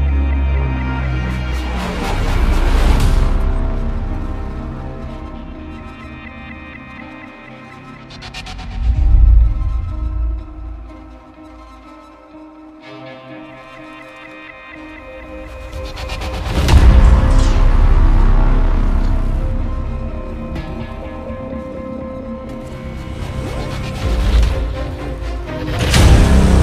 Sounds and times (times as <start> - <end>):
Music: 0.0 - 26.6.